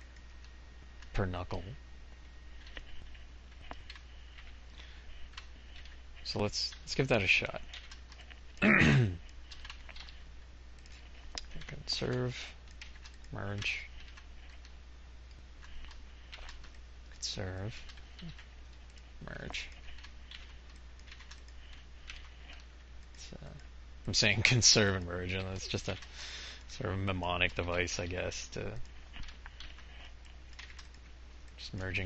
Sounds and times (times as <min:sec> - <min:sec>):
Typing: 0:07.6 - 0:08.3, 0:09.2 - 0:10.2, 0:10.8 - 0:14.7, 0:15.6 - 0:16.8, 0:17.7 - 0:22.7, 0:25.7 - 0:26.2, 0:29.1 - 0:32.0.